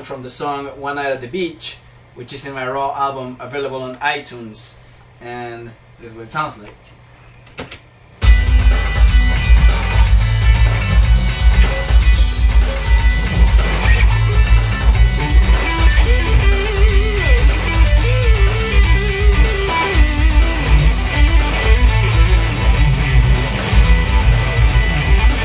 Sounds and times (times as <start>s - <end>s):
Speech: 0.0s - 6.9s
Bass guitar: 8.2s - 25.4s
Strum: 8.2s - 25.4s.